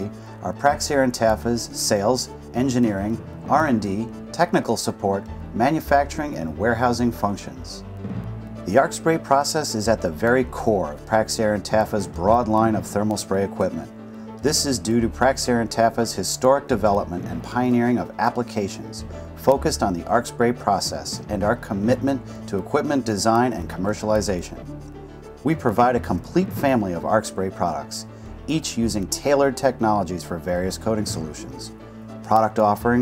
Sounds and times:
Speech: 0.0 - 7.8, 8.7 - 24.7, 25.4 - 33.0
Music: 0.0 - 33.0.

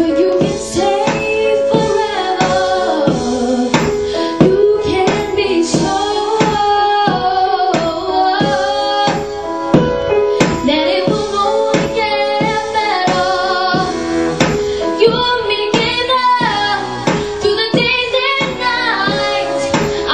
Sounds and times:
Female singing: 0.0 - 3.8, 4.4 - 9.3, 10.6 - 13.9, 15.0 - 20.1
Music: 0.0 - 20.1.

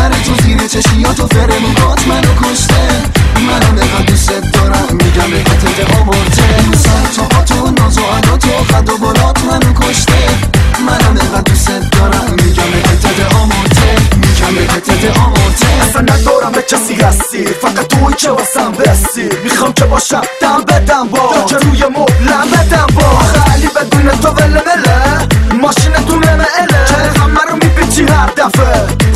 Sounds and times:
Funny music: 0.0 - 29.1
Pop music: 0.0 - 29.1.

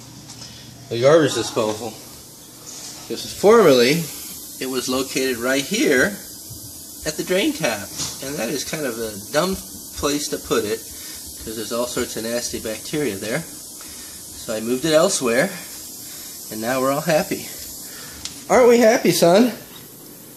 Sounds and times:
Speech: 0.9 - 2.0, 3.1 - 6.2, 7.0 - 10.8, 11.4 - 13.5, 14.4 - 15.6, 16.5 - 17.6, 18.5 - 19.7.

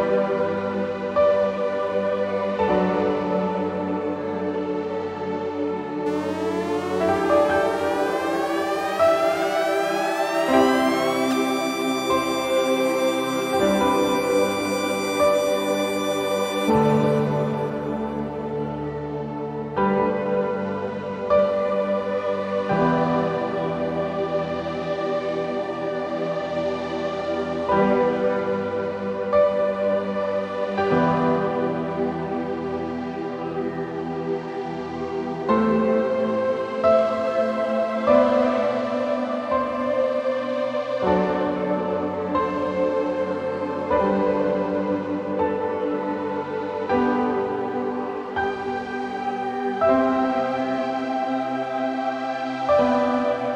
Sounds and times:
Music: 0.0 - 53.5.

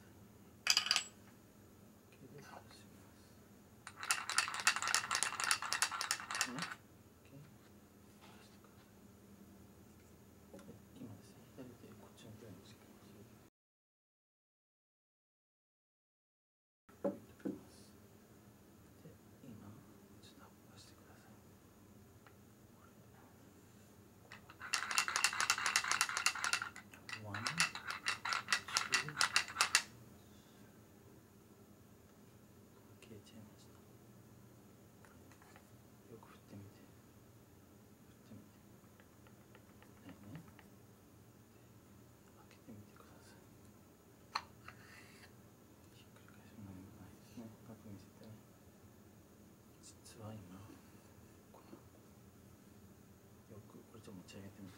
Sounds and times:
Speech: 2.1 - 3.4, 6.5 - 7.6, 10.5 - 13.3, 17.2 - 18.0, 19.0 - 21.4, 27.1 - 27.7, 33.0 - 33.8, 36.1 - 36.9, 40.0 - 40.5, 42.4 - 43.4, 45.9 - 48.4, 49.7 - 50.8, 53.5 - 54.7.

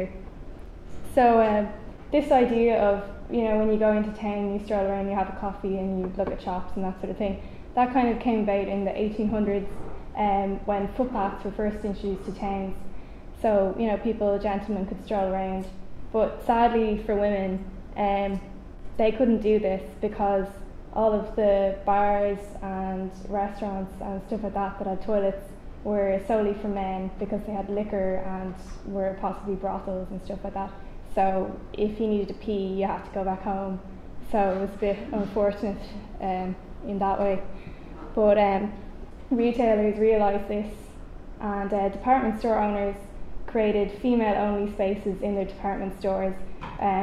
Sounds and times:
Speech: 0.0 - 0.2, 1.0 - 37.5, 38.1 - 47.0.

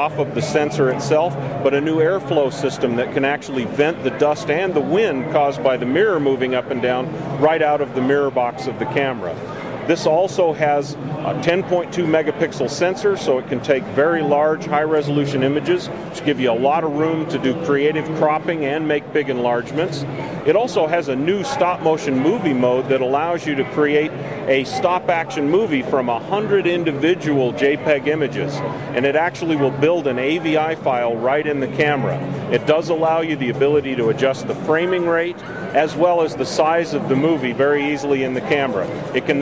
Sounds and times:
Speech: 0.0 - 39.4.

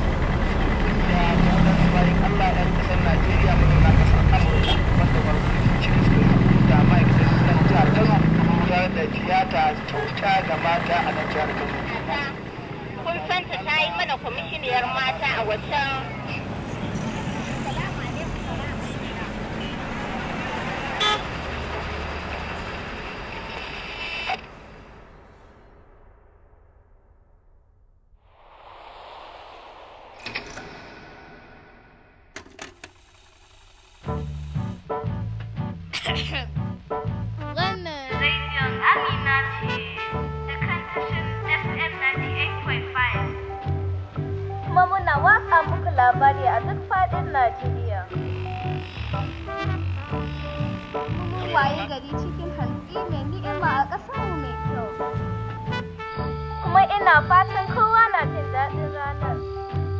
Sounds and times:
Speech: 0.9 - 16.4, 37.5 - 43.3, 44.7 - 48.1, 51.2 - 54.9, 56.7 - 59.4.

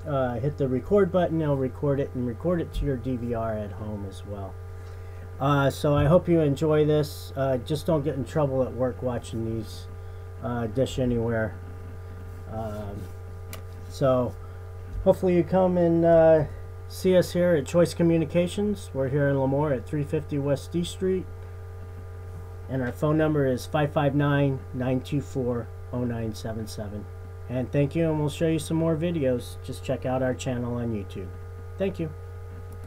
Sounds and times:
Speech: 0.0 - 4.6, 5.4 - 11.6, 12.5 - 13.1, 13.9 - 14.4, 15.0 - 21.3, 22.7 - 32.2.

